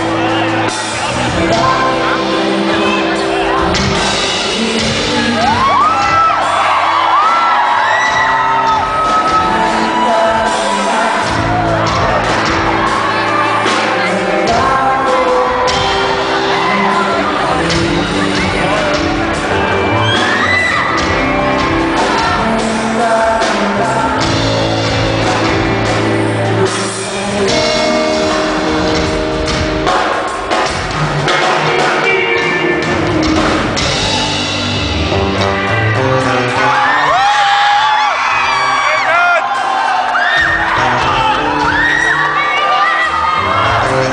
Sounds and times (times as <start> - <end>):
Pop music: 0.0 - 44.1
Singing: 1.0 - 29.2.